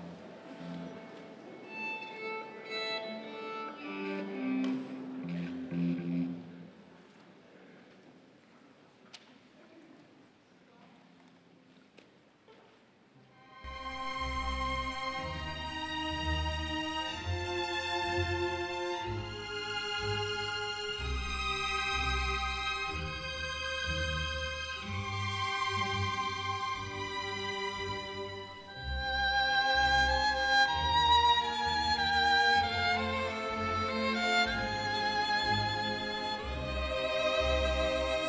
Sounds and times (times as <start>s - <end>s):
Violin, fiddle: 0.0s - 6.7s, 13.4s - 38.2s.